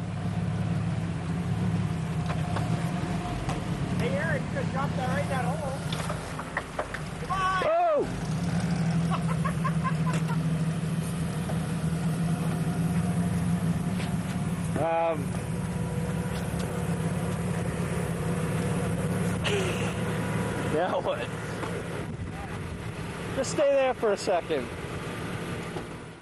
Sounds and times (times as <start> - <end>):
Outside, rural or natural: 0.0 - 26.2
Truck: 0.0 - 26.2
Speech: 4.0 - 5.8, 14.8 - 15.3, 20.7 - 21.3, 23.4 - 24.7.